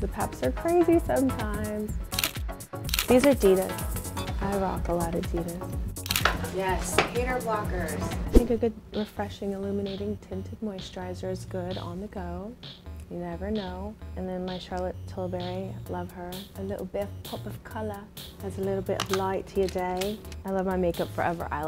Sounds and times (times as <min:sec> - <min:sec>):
Music: 0:00.0 - 0:21.6
Speech: 0:03.1 - 0:03.7, 0:06.6 - 0:21.6.